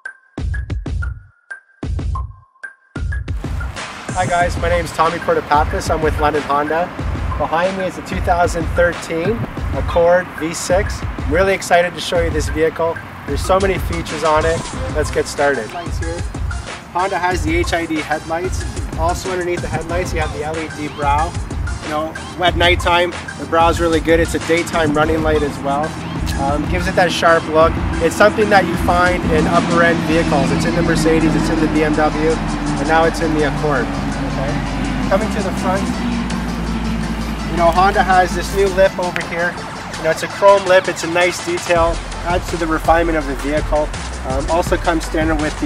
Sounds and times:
Music: 0.0s - 45.6s
Speech: 4.2s - 16.3s, 17.0s - 35.9s, 37.5s - 45.6s.

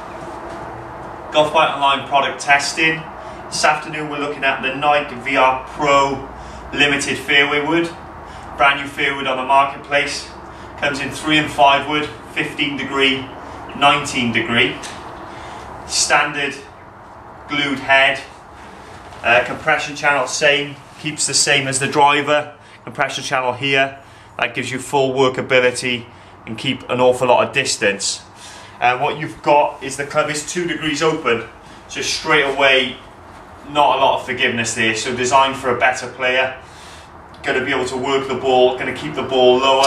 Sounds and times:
Speech: 1.4s - 8.0s, 8.6s - 15.0s, 15.9s - 16.7s, 17.5s - 18.4s, 19.2s - 36.6s, 37.4s - 39.8s.

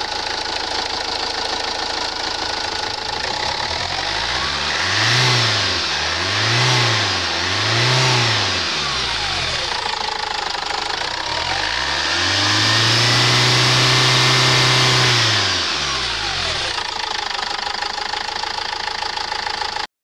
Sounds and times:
Idling: 0.0s - 19.9s
Medium engine (mid frequency): 0.0s - 19.9s
Vehicle: 0.0s - 19.9s.

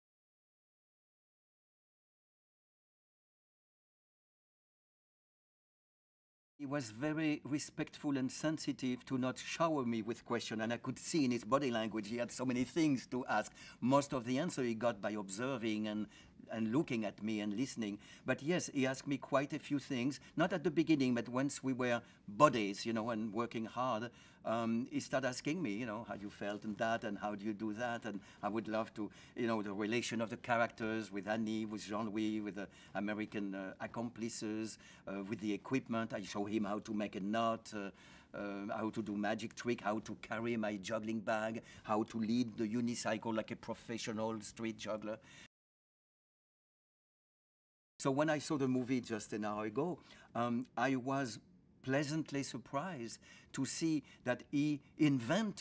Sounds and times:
Speech: 6.6s - 45.3s, 48.0s - 55.6s.

